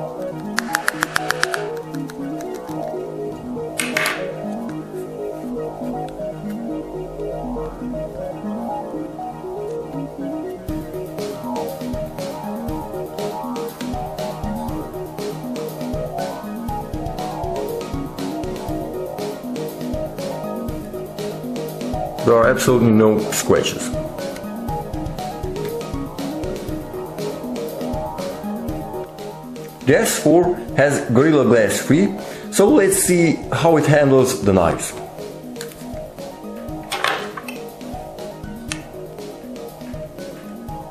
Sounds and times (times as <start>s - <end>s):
Music: 0.0s - 40.9s.